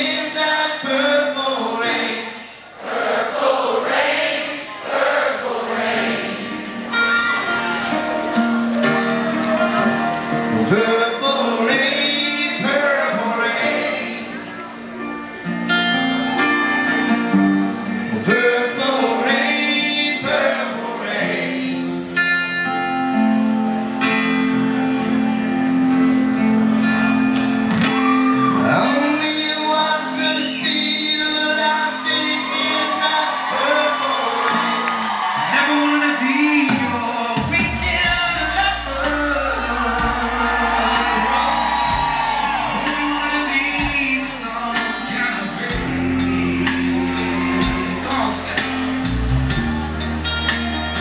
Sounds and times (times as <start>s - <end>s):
Music: 0.0s - 2.6s, 4.9s - 51.0s.